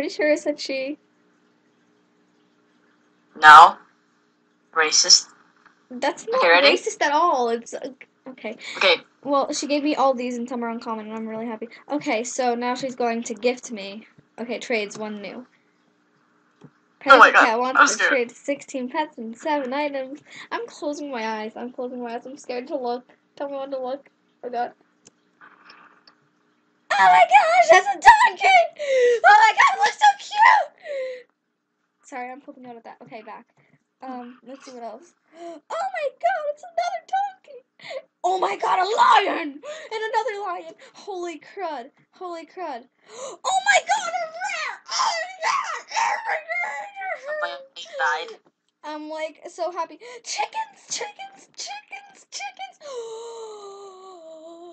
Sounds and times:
Speech: 0:00.0 - 0:01.0, 0:03.4 - 0:03.8, 0:04.8 - 0:05.3, 0:05.9 - 0:15.4, 0:17.0 - 0:24.7, 0:26.9 - 0:31.2, 0:32.1 - 0:33.4, 0:34.0 - 0:42.9, 0:43.5 - 0:54.7.

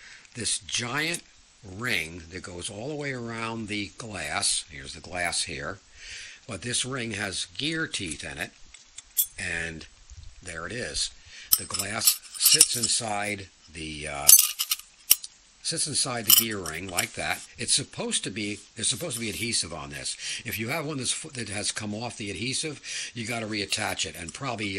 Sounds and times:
Speech: 0:00.4 - 0:05.8, 0:06.5 - 0:08.6, 0:09.4 - 0:14.4, 0:15.6 - 0:24.7.

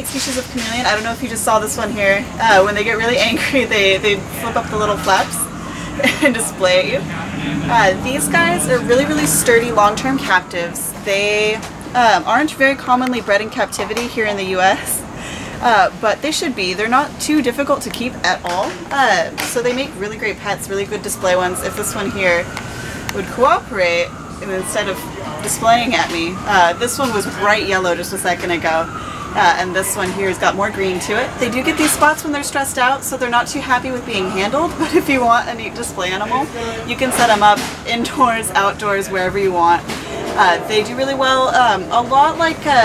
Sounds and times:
Speech: 0:00.0 - 0:22.5, 0:23.1 - 0:42.8.

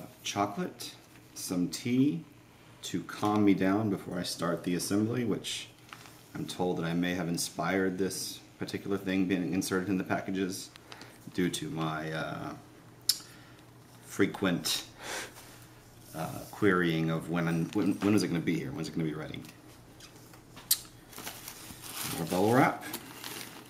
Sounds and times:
Speech: 0:00.0 - 0:05.8, 0:06.4 - 0:12.6, 0:14.1 - 0:15.0, 0:16.1 - 0:19.6, 0:22.1 - 0:23.0.

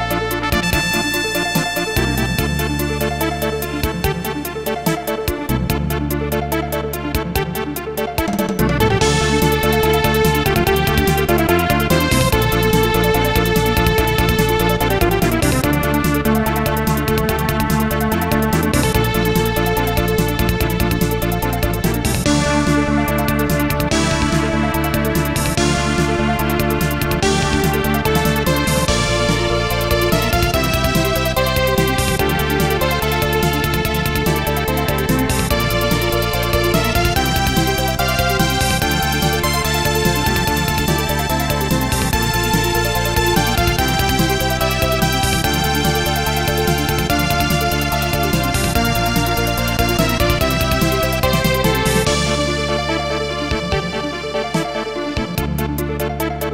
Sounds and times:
Funny music: 0:00.0 - 0:56.5.

